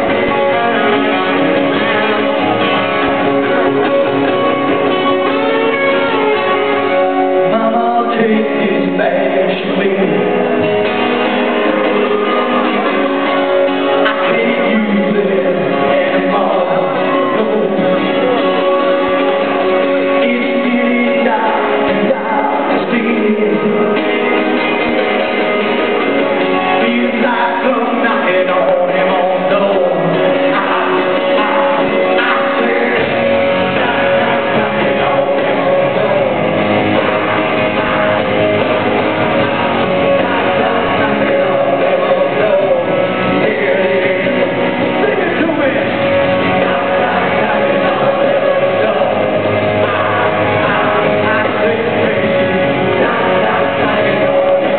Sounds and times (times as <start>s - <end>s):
Music: 0.0s - 54.7s.